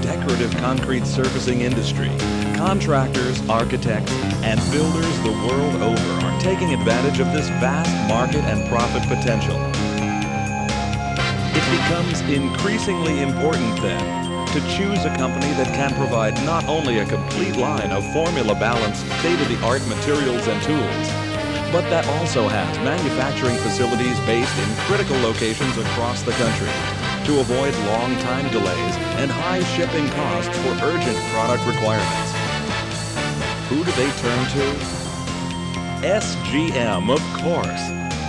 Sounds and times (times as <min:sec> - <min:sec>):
Speech: 0:00.0 - 0:09.7, 0:11.6 - 0:21.1, 0:21.7 - 0:32.4, 0:33.7 - 0:34.8, 0:36.0 - 0:37.9
Music: 0:00.0 - 0:38.2.